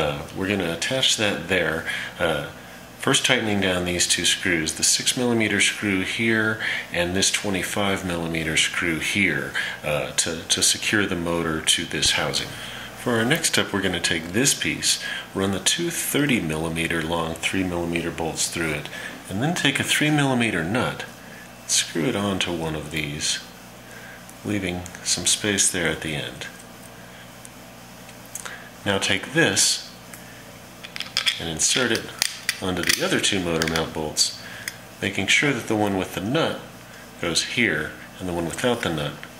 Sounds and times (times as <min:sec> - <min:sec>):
Speech: 0:00.0 - 0:23.5, 0:24.4 - 0:26.6, 0:28.8 - 0:30.0, 0:31.4 - 0:34.4, 0:35.0 - 0:39.3.